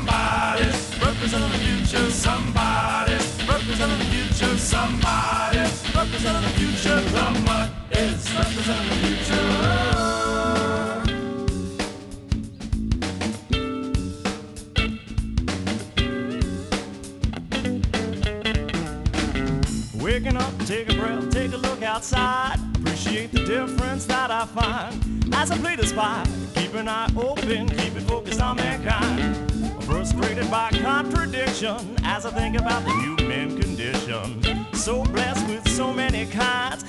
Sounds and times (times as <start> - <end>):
Music: 0.0 - 36.8.